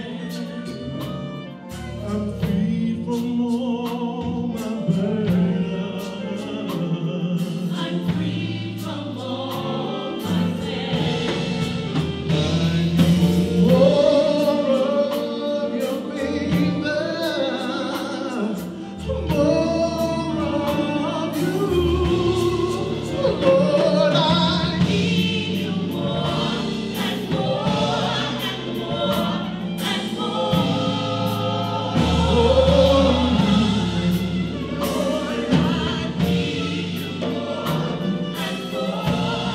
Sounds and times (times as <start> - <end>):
Music: 0.0 - 39.5.